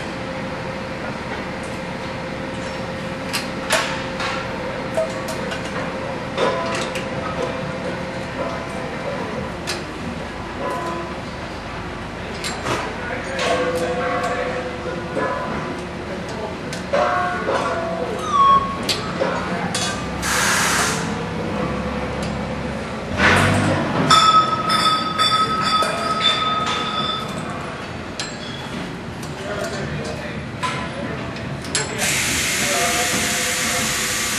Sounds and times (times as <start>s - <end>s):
Speech: 12.2s - 18.3s, 19.0s - 20.0s, 29.3s - 34.3s.